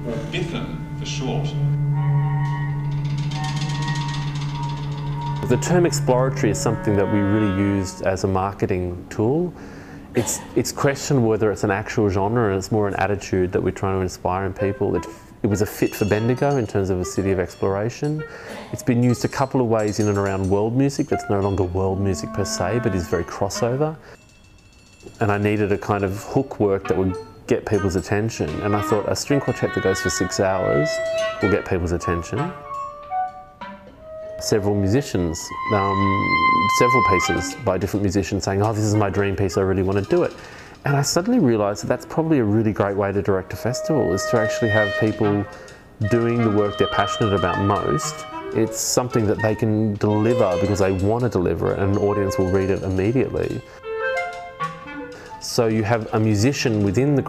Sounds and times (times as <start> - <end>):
Speech: 0.0 - 1.6, 5.4 - 9.6, 10.2 - 24.0, 25.1 - 32.6, 34.4 - 53.7, 55.4 - 57.2
Music: 0.0 - 10.2, 10.9 - 57.2.